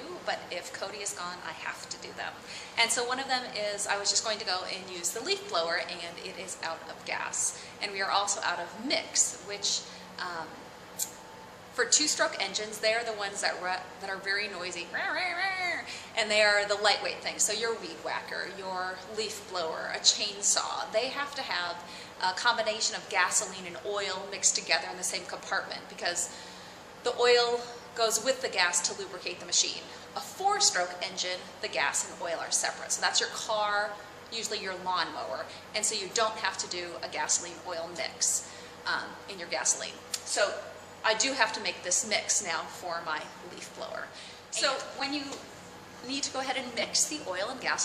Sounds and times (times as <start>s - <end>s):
Speech: 0.0s - 10.6s, 11.8s - 26.3s, 27.1s - 45.4s, 46.0s - 47.8s.